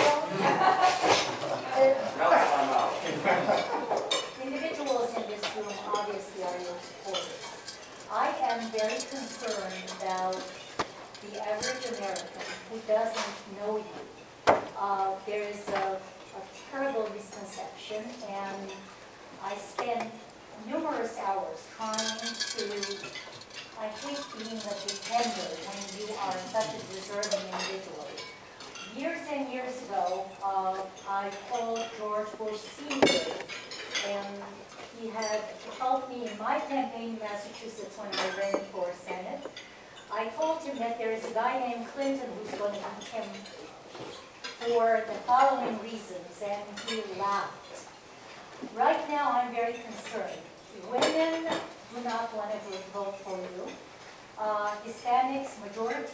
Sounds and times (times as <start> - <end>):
Speech: 4.4 - 7.5, 8.1 - 10.5, 11.3 - 14.0, 16.7 - 18.8, 19.4 - 23.0, 23.8 - 28.2, 28.9 - 39.5, 40.1 - 43.8, 44.6 - 47.9, 48.7 - 53.8, 54.4 - 56.1
Dishes, pots, and pans: 32.9 - 34.1.